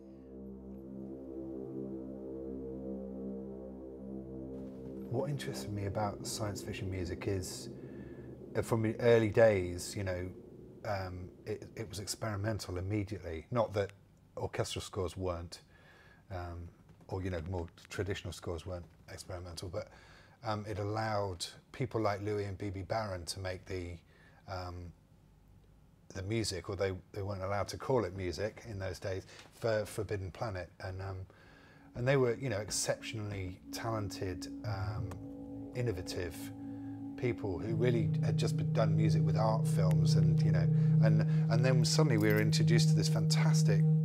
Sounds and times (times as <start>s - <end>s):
Music: 0.0s - 12.3s, 31.8s - 44.0s
Speech: 5.1s - 7.7s, 8.6s - 15.7s, 16.3s - 25.0s, 26.1s - 31.3s, 32.0s - 35.2s, 35.8s - 36.5s, 37.2s - 43.9s.